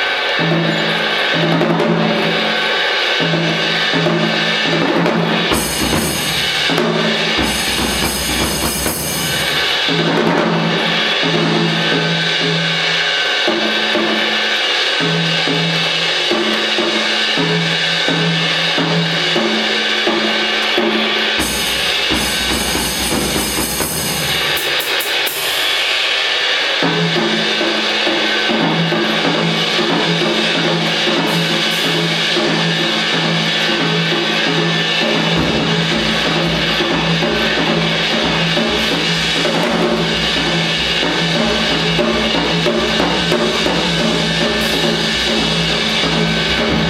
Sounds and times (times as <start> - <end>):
Drum kit: 0.0 - 46.9
Drum: 0.4 - 46.9.